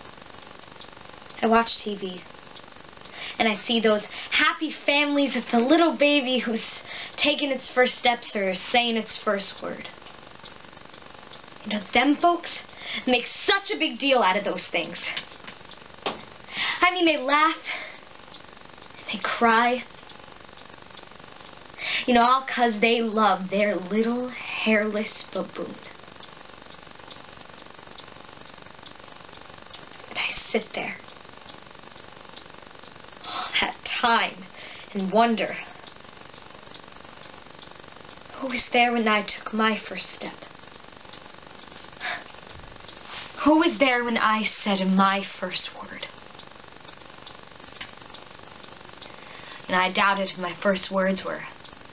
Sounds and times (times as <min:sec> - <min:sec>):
Speech: 0:01.4 - 0:02.2, 0:03.4 - 0:09.9, 0:11.6 - 0:15.2, 0:16.8 - 0:17.8, 0:19.1 - 0:19.9, 0:22.0 - 0:25.9, 0:30.1 - 0:31.0, 0:33.3 - 0:35.8, 0:38.4 - 0:40.5, 0:43.4 - 0:46.1, 0:49.7 - 0:51.6.